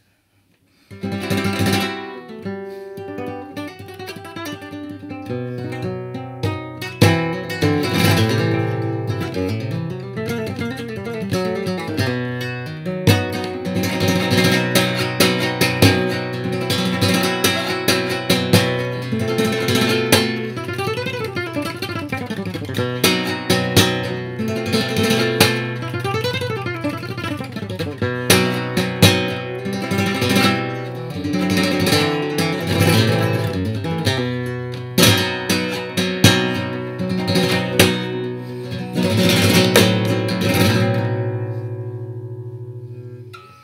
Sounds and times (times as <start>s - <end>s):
Acoustic guitar: 0.0s - 43.6s
Strum: 0.0s - 43.6s.